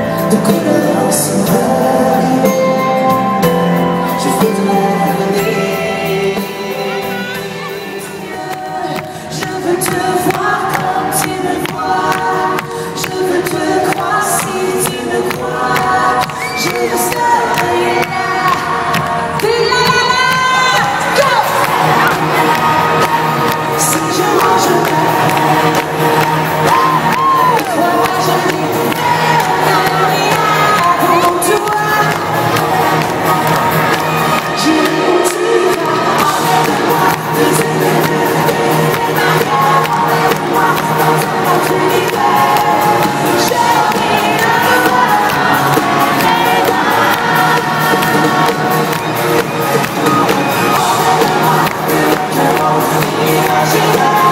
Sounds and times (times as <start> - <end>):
Music: 0.0 - 54.3.